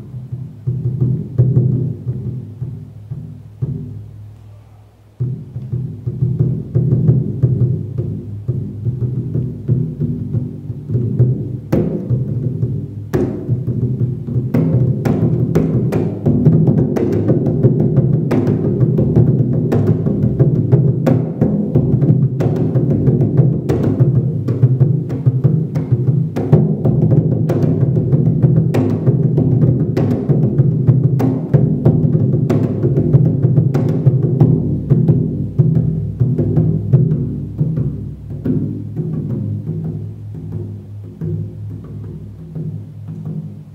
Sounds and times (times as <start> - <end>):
Drum: 0.0 - 43.7.